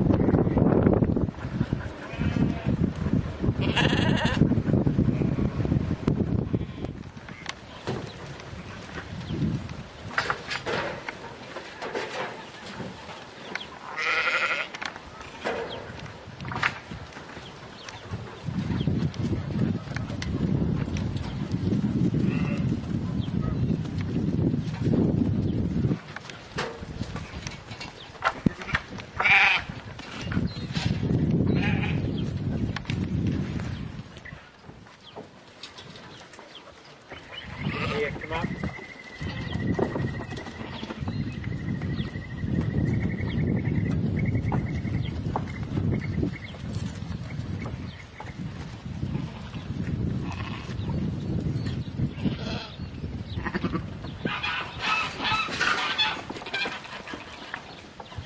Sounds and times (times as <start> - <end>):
Bleat: 2.0 - 2.8, 3.6 - 4.5, 6.5 - 7.0, 13.9 - 14.8, 29.2 - 29.7, 31.5 - 32.1, 37.6 - 38.2, 49.1 - 50.8, 52.2 - 52.8, 53.4 - 53.9.